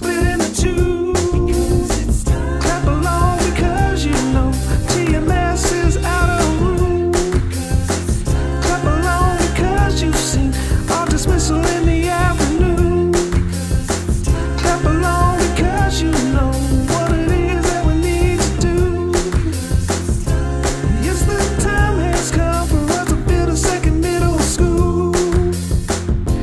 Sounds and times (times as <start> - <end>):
Dance music: 0.0 - 26.4
Ska: 0.0 - 26.4.